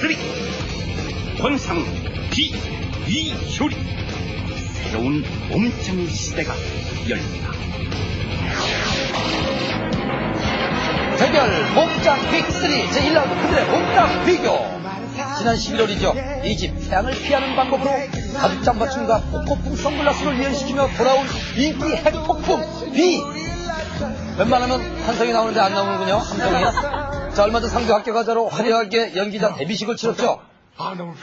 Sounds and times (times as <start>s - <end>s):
Music: 0.0s - 30.4s.